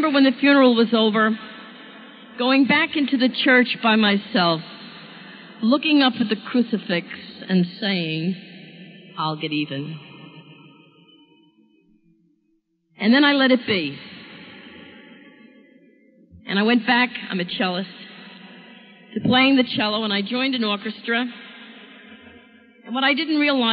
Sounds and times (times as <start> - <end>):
Narration, monologue: 0.0 - 10.9, 13.0 - 23.7.